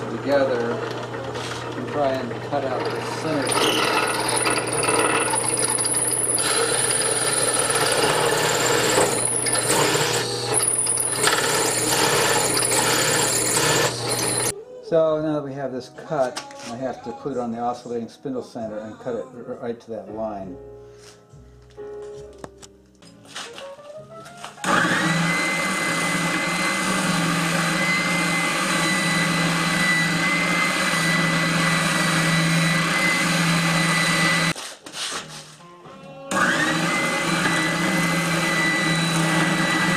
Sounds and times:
Blender: 0:00.0 - 0:14.5, 0:24.6 - 0:34.6, 0:36.3 - 0:39.9
Music: 0:14.5 - 0:24.8, 0:34.6 - 0:36.9.

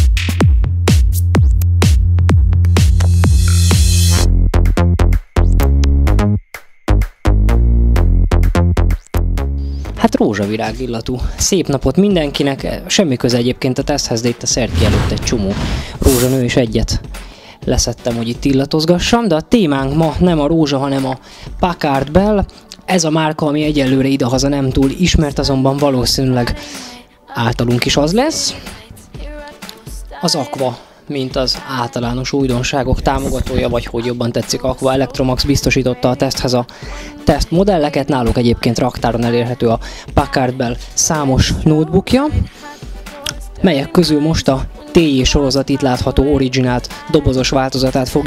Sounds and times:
Music: 0:00.0 - 0:48.2
Speech: 0:10.0 - 0:26.6, 0:27.3 - 0:28.8, 0:29.8 - 0:42.5, 0:43.3 - 0:48.2.

